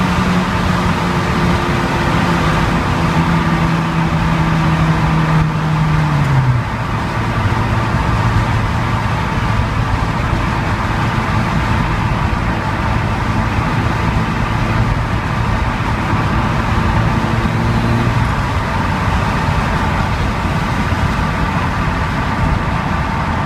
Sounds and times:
Car: 0:00.0 - 0:23.4.

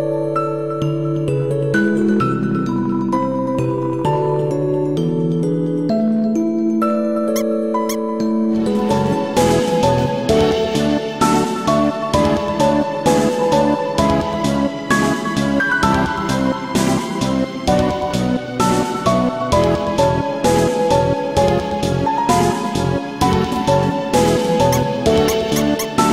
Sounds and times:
Video game music: 0:00.0 - 0:26.1.

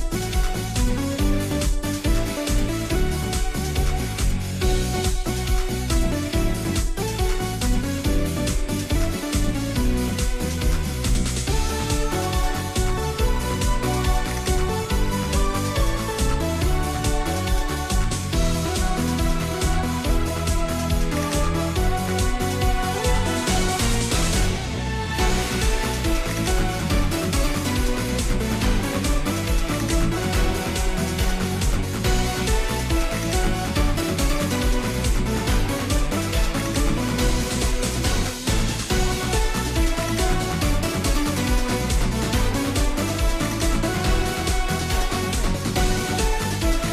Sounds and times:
Music: 0:00.0 - 0:46.9.

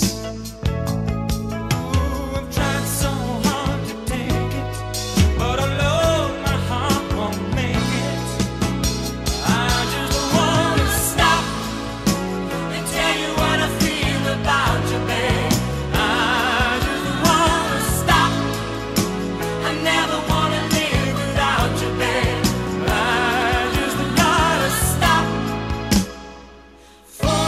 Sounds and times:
Soul music: 0:00.0 - 0:27.4.

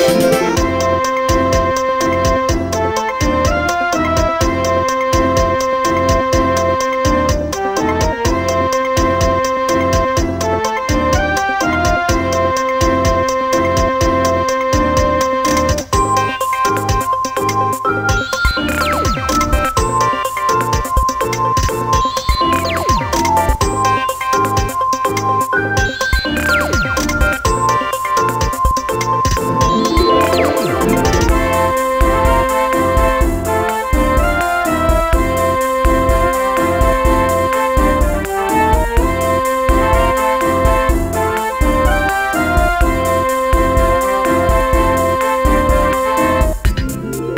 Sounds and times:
Music: 0:00.0 - 0:47.3.

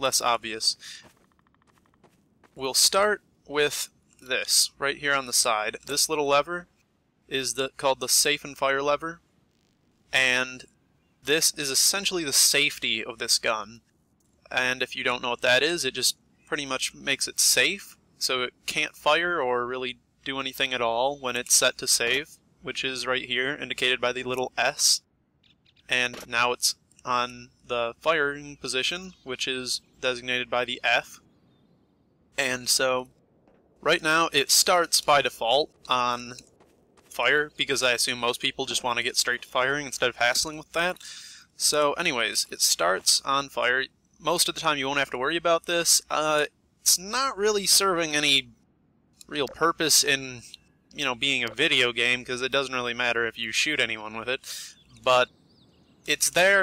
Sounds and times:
Speech: 0:00.0 - 0:01.1, 0:02.6 - 0:06.7, 0:07.3 - 0:09.2, 0:10.2 - 0:10.7, 0:11.3 - 0:13.8, 0:14.5 - 0:25.0, 0:25.9 - 0:31.2, 0:32.4 - 0:33.1, 0:33.8 - 0:36.4, 0:37.1 - 0:48.5, 0:49.2 - 0:55.3, 0:56.1 - 0:56.6.

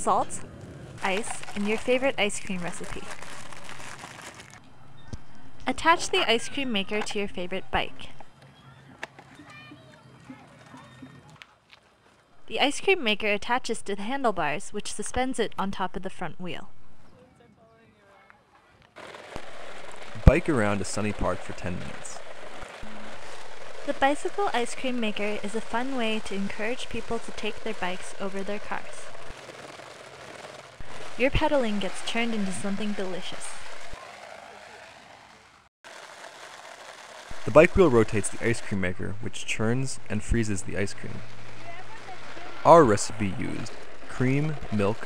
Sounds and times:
Speech: 0:00.0 - 0:00.4, 0:01.0 - 0:03.1, 0:05.7 - 0:08.1, 0:12.5 - 0:16.7, 0:20.2 - 0:22.2, 0:23.9 - 0:29.1, 0:31.2 - 0:33.6, 0:37.5 - 0:45.0.

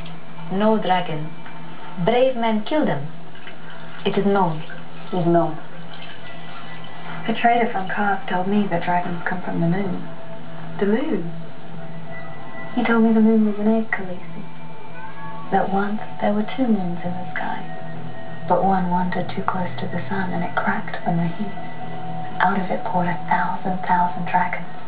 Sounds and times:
Speech: 0:00.5 - 0:01.4, 0:02.0 - 0:03.1, 0:04.0 - 0:05.7, 0:07.2 - 0:10.1, 0:10.8 - 0:11.4, 0:12.8 - 0:14.4, 0:15.5 - 0:17.9, 0:18.5 - 0:24.8.

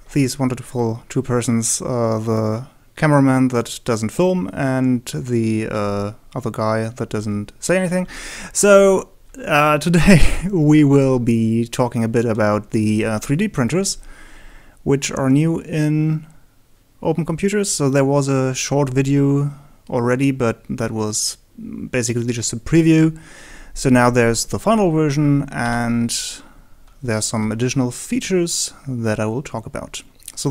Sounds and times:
Speech: 0:00.1 - 0:14.0, 0:14.8 - 0:16.4, 0:17.0 - 0:23.2, 0:23.8 - 0:30.5.

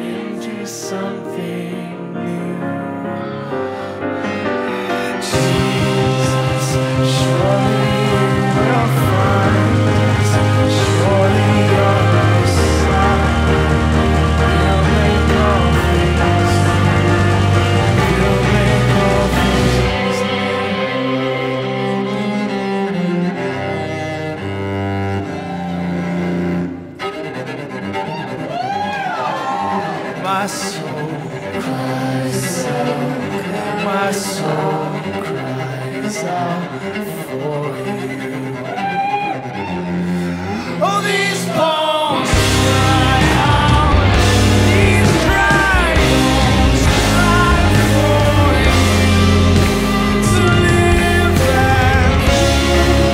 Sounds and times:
Cello: 0:00.0 - 0:53.1
Double bass: 0:05.3 - 0:27.1, 0:35.0 - 0:53.1.

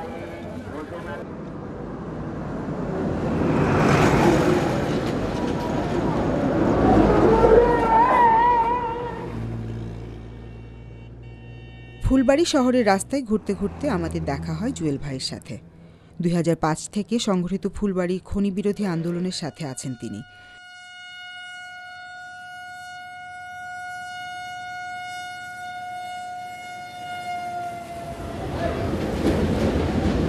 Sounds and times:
Vehicle horn, car horn, honking: 0:10.1 - 0:12.8, 0:18.9 - 0:28.1
Speech: 0:12.0 - 0:15.6, 0:16.2 - 0:20.2.

